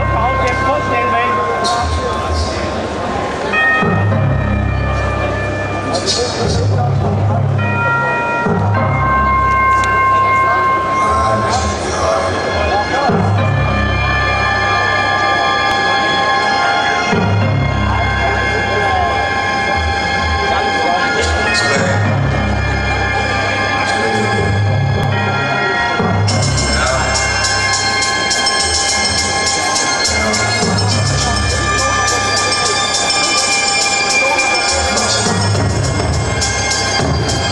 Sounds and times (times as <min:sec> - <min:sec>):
Speech: 0:00.0 - 0:04.2, 0:04.8 - 0:36.1
Music: 0:00.0 - 0:37.5.